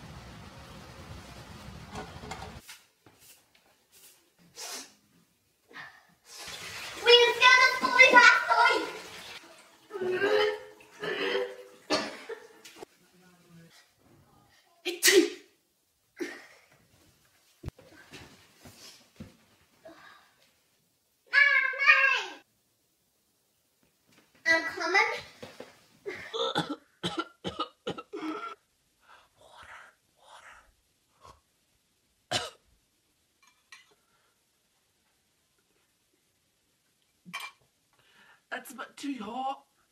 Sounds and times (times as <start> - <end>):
Inside, small room: 0.0 - 39.9
Speech: 7.0 - 9.0, 38.5 - 39.7.